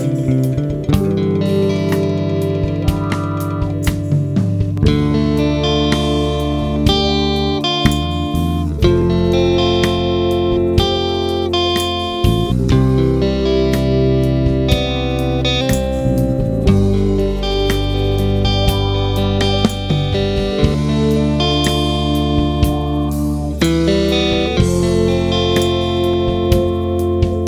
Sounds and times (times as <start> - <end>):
Drum kit: 0.0 - 15.0, 15.7 - 27.4
Guitar: 0.0 - 27.4
Drum: 1.9 - 7.0.